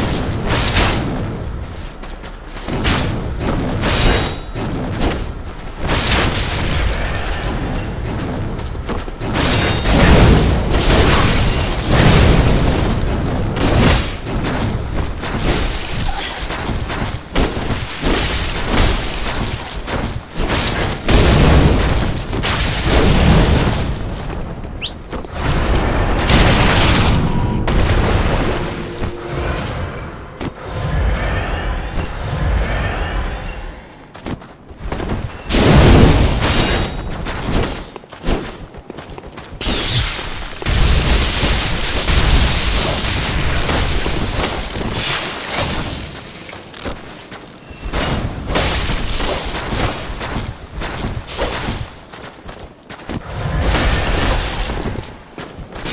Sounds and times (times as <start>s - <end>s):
Boom: 25.6s - 29.2s.